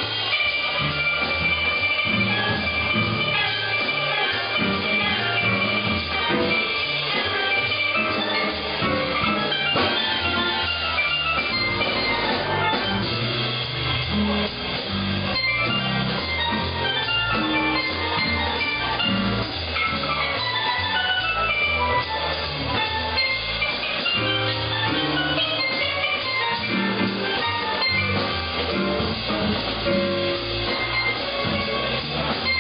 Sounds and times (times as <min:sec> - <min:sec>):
Drum kit: 0:00.0 - 0:32.6
Snare drum: 0:00.0 - 0:32.6
Steelpan: 0:00.0 - 0:32.6.